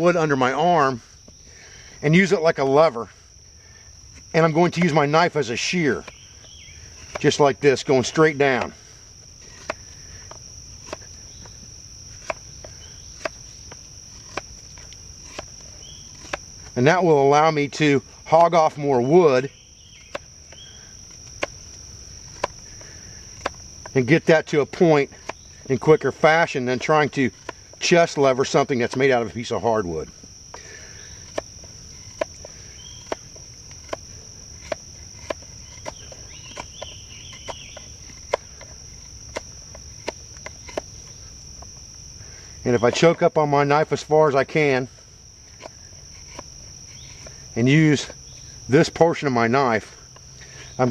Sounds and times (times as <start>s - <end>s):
Cricket: 0.0s - 50.9s.